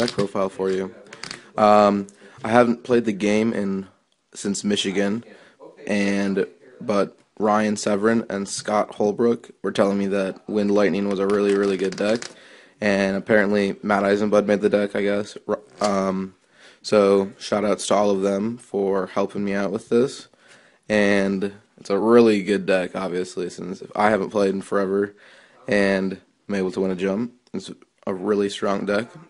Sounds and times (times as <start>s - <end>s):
Speech: 0.0s - 20.3s, 20.9s - 29.2s.